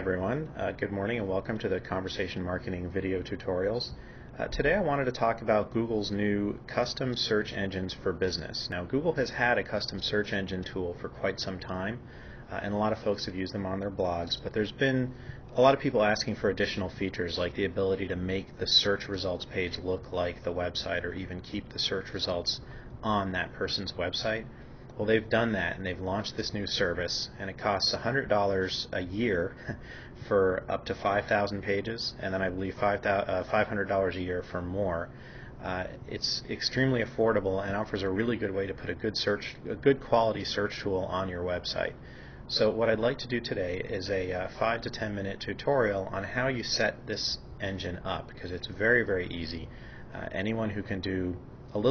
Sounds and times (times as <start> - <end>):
Speech: 0.0 - 29.6, 30.2 - 51.9.